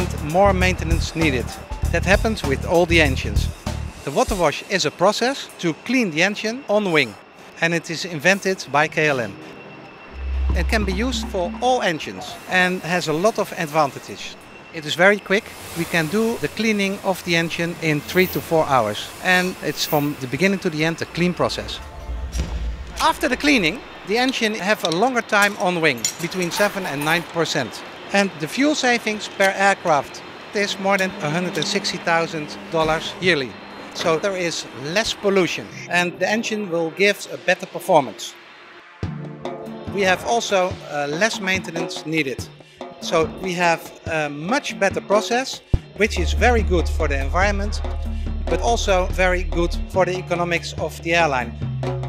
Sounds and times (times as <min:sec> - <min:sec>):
Speech: 0:00.0 - 0:03.5, 0:04.1 - 0:09.4, 0:10.5 - 0:21.8, 0:23.0 - 0:38.4, 0:39.9 - 0:47.8, 0:48.5 - 0:51.5.